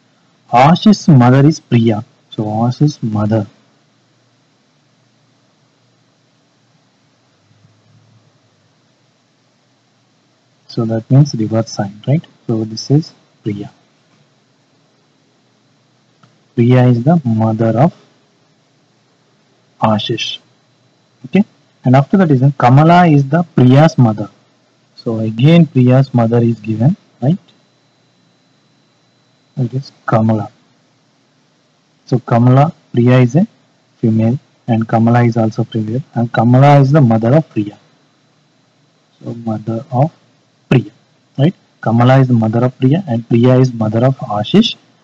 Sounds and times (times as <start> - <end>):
Speech: 0.5 - 3.6, 10.7 - 13.8, 16.6 - 18.0, 19.8 - 20.5, 21.3 - 24.4, 25.0 - 27.5, 29.6 - 30.6, 32.1 - 37.8, 39.2 - 44.8.